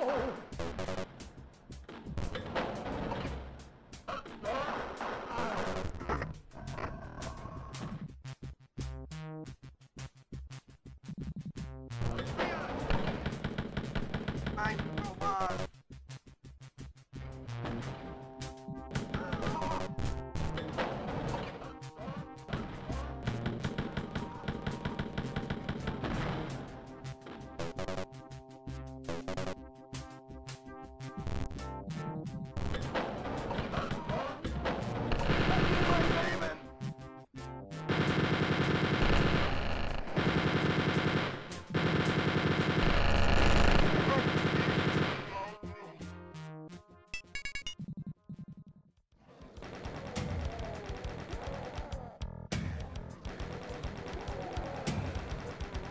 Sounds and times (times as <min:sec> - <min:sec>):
Music: 0:00.0 - 0:55.9.